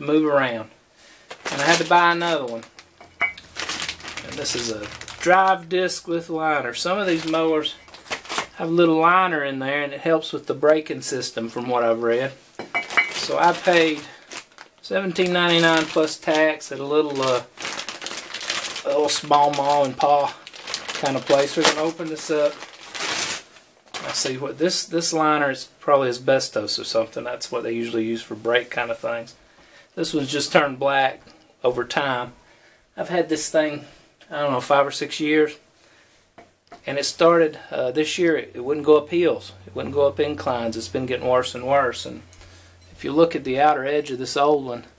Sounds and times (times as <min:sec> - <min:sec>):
Speech: 0:00.0 - 0:00.8, 0:01.5 - 0:02.7, 0:04.2 - 0:07.8, 0:08.6 - 0:12.4, 0:13.2 - 0:14.2, 0:14.8 - 0:17.5, 0:18.8 - 0:20.4, 0:21.0 - 0:22.6, 0:24.0 - 0:29.4, 0:30.0 - 0:32.4, 0:33.0 - 0:35.6, 0:36.8 - 0:42.3, 0:43.0 - 0:44.9.